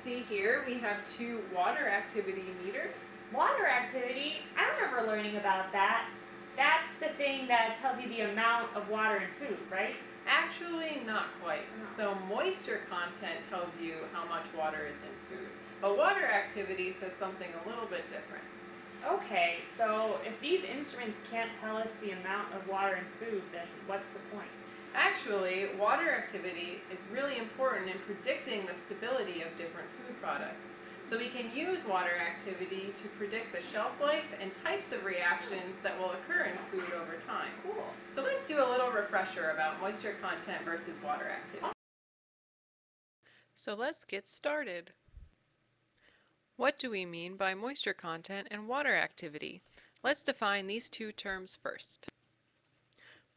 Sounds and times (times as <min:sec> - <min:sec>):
Speech: 0:00.0 - 0:41.8, 0:43.6 - 0:45.0, 0:46.6 - 0:52.1.